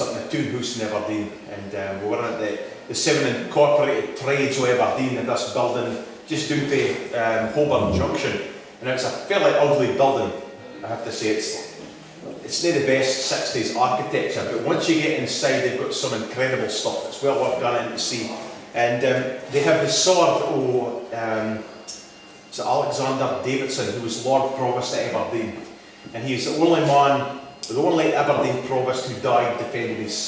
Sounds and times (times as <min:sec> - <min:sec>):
Speech: 0:00.0 - 0:21.7, 0:22.5 - 0:30.2.